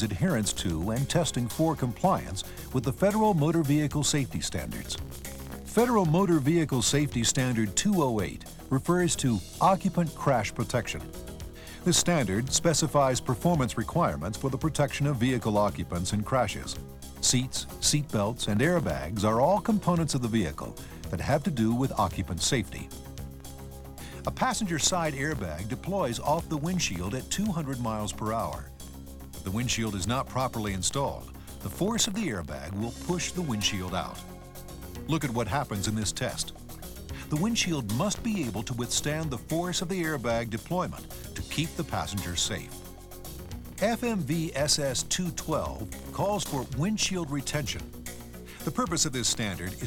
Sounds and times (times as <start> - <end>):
Speech: 0.0 - 5.0, 5.7 - 11.1, 11.8 - 22.9, 24.1 - 28.7, 29.4 - 34.3, 35.1 - 36.6, 37.2 - 42.8, 43.8 - 47.9, 48.6 - 49.8
Music: 0.0 - 49.8.